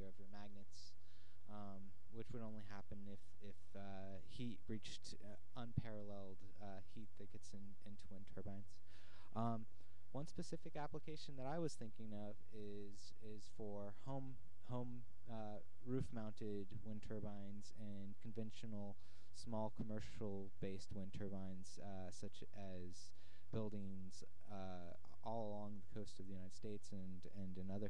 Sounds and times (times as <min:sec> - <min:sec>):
Speech: 0:00.0 - 0:27.8.